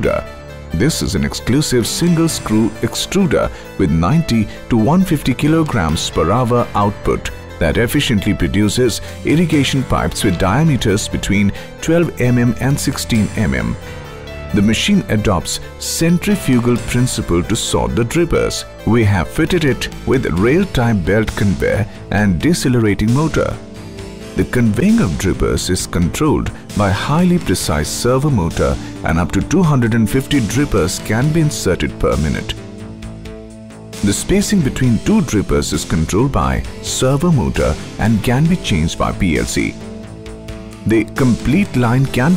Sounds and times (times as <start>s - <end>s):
Speech: 0.0s - 13.8s, 14.5s - 23.6s, 24.4s - 32.6s, 34.0s - 39.8s, 40.8s - 42.3s
Music: 0.0s - 42.3s.